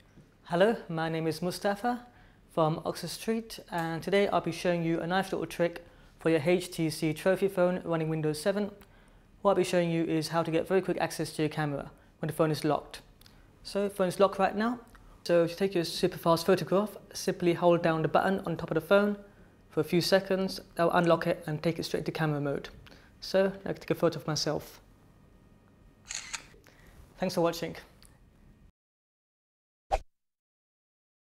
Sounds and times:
Speech: 0.5s - 8.8s, 9.4s - 24.9s, 27.2s - 28.0s.

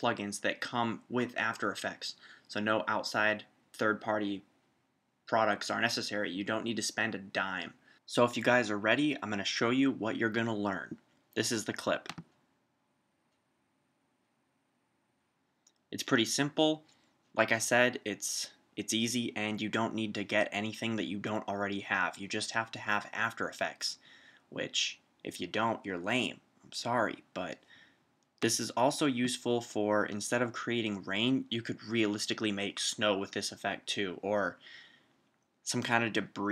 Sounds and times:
Speech: 0.0s - 4.5s, 5.3s - 12.2s, 16.0s - 16.8s, 17.4s - 27.6s, 28.4s - 34.7s, 35.7s - 36.5s.

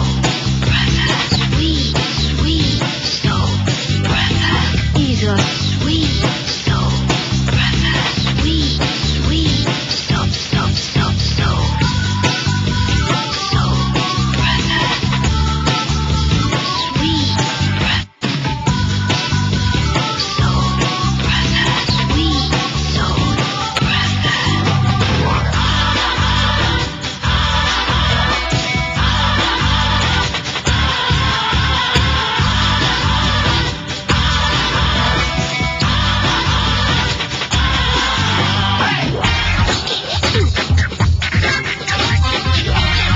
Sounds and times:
Music: 0.0s - 43.1s.

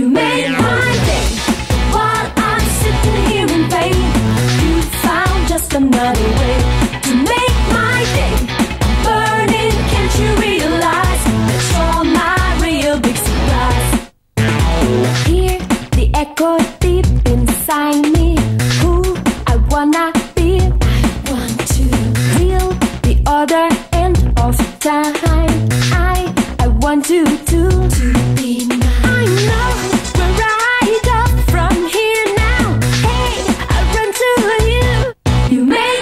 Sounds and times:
Funk: 0.2s - 35.6s.

